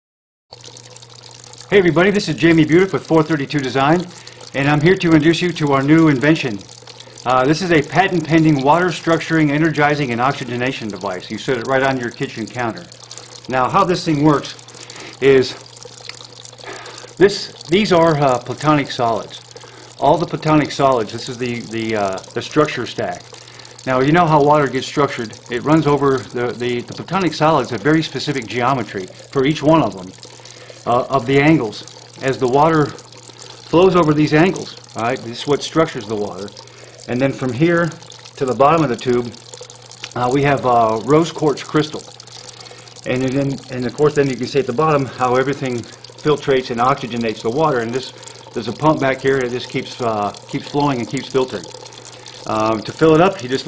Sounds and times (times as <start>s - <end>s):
Water: 0.5s - 53.6s.